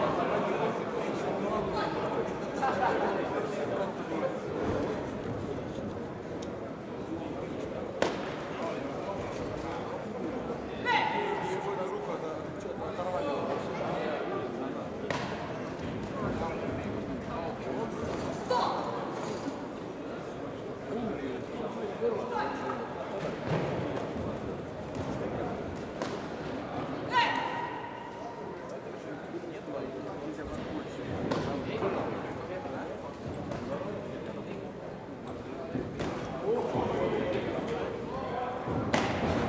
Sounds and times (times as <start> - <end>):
Speech: 0.0 - 19.2, 20.0 - 25.8, 26.6 - 39.4.